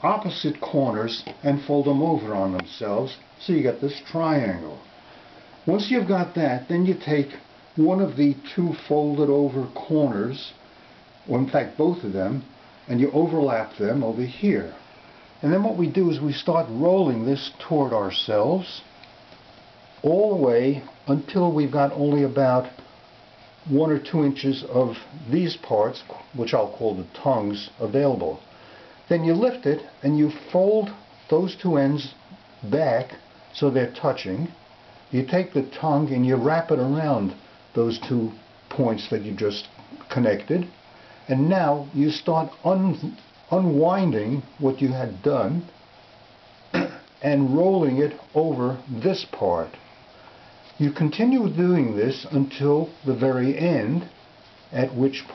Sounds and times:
Speech: 0:00.0 - 0:04.9, 0:05.6 - 0:10.6, 0:11.2 - 0:14.8, 0:15.4 - 0:18.9, 0:20.0 - 0:22.8, 0:23.6 - 0:28.4, 0:29.1 - 0:45.8, 0:46.8 - 0:49.8, 0:50.8 - 0:55.3.

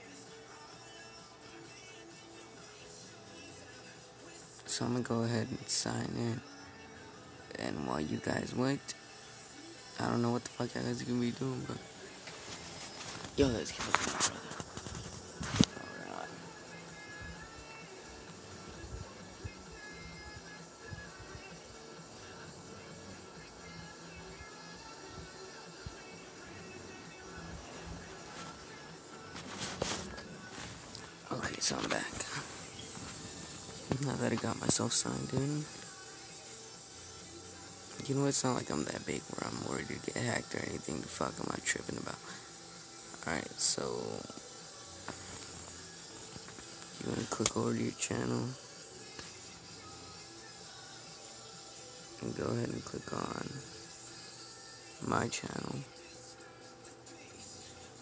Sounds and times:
Inside, small room: 0:00.0 - 0:58.0
Music: 0:00.0 - 0:58.0
Speech: 0:04.6 - 0:06.4, 0:07.5 - 0:09.0, 0:10.0 - 0:11.8, 0:13.4 - 0:14.0, 0:16.0 - 0:16.4, 0:31.2 - 0:32.5, 0:33.9 - 0:35.8, 0:38.0 - 0:42.4, 0:43.2 - 0:44.4, 0:47.0 - 0:48.6, 0:52.2 - 0:53.6, 0:55.0 - 0:55.9.

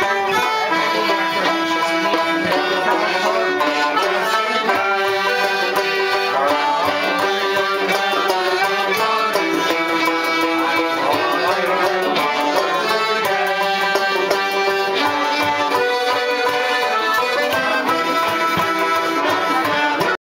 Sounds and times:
Music: 0:00.0 - 0:20.2.

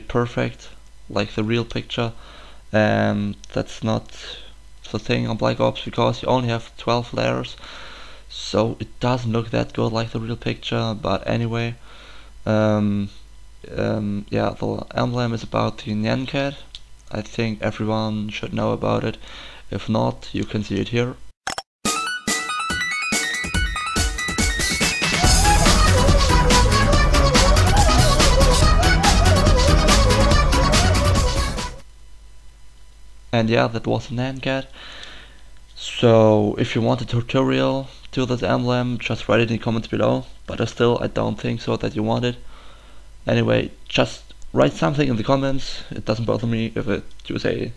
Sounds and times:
Speech: 0:00.0 - 0:02.2, 0:02.8 - 0:07.6, 0:08.3 - 0:11.8, 0:12.5 - 0:21.2, 0:33.3 - 0:34.7, 0:35.8 - 0:42.4, 0:43.3 - 0:47.7
Music: 0:21.8 - 0:31.8.

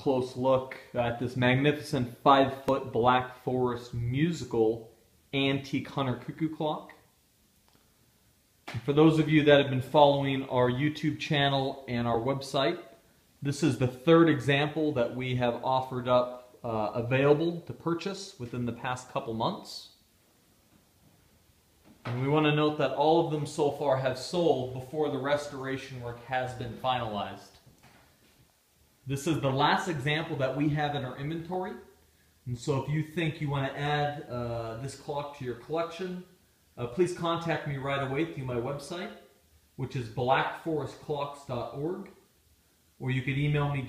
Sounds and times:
Speech: 0:00.0 - 0:07.1, 0:08.7 - 0:20.0, 0:22.0 - 0:27.6, 0:29.0 - 0:42.2, 0:43.0 - 0:43.8.

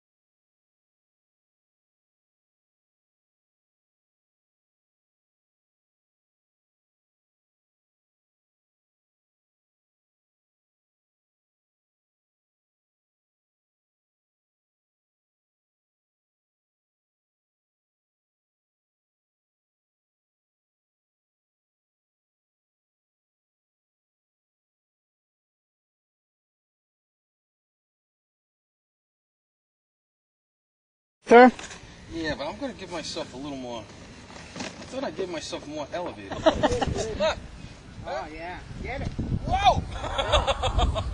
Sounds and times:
Speech: 0:31.3 - 0:33.9.

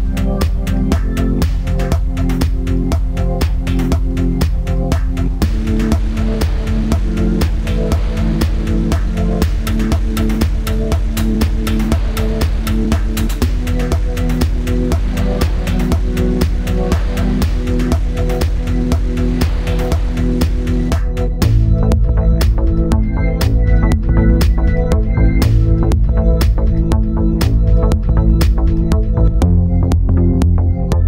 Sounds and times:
Music: 0:00.0 - 0:31.0.

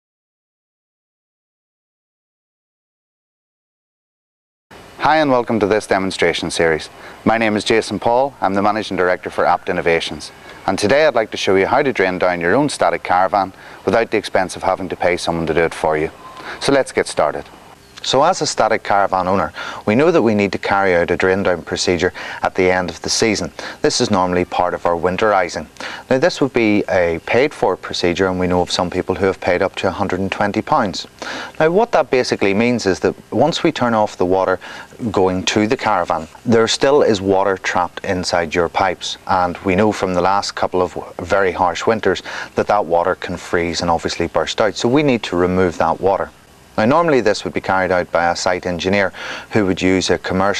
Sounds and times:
Speech: 0:05.0 - 0:50.5.

